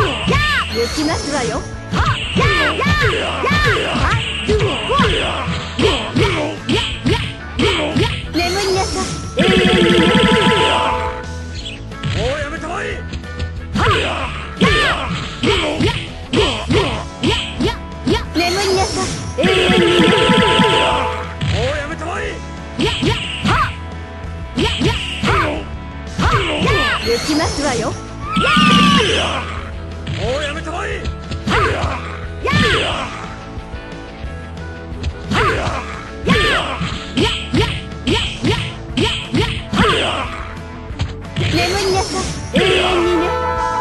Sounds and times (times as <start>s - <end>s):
Music: 0.0s - 43.8s.